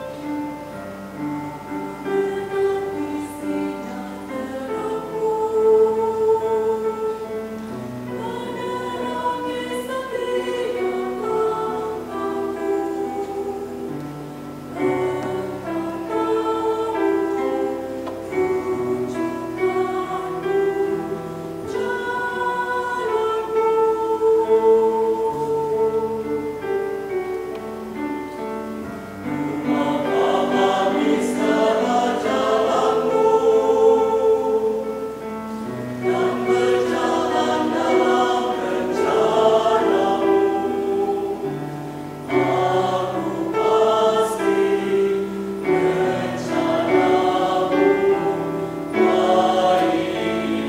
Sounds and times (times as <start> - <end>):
Choir: 0.0 - 50.6.